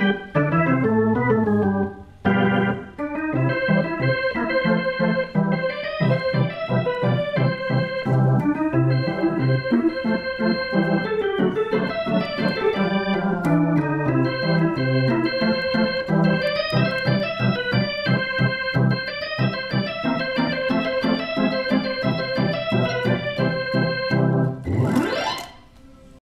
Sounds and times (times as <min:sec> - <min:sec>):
Electronic organ: 0:00.0 - 0:25.8.